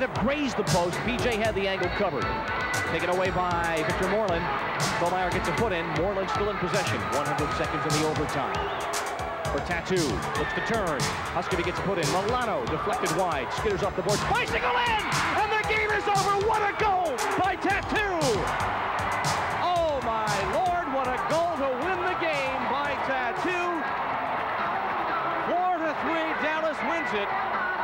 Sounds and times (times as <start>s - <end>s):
Speech: 0.0s - 2.2s, 2.9s - 8.6s, 9.6s - 18.5s, 19.6s - 23.8s, 25.5s - 27.3s
Music: 0.0s - 27.8s.